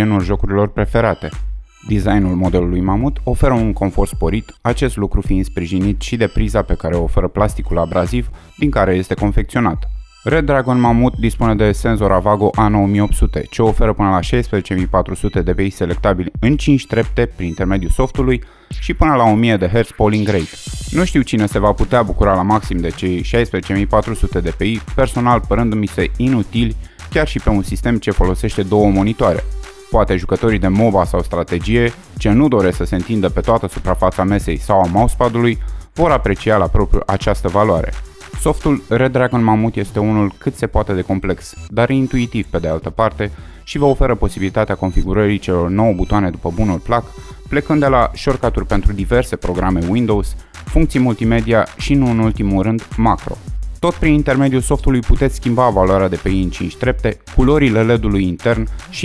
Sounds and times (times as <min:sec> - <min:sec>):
Music: 0:00.0 - 0:59.0
Speech: 0:00.0 - 0:59.0.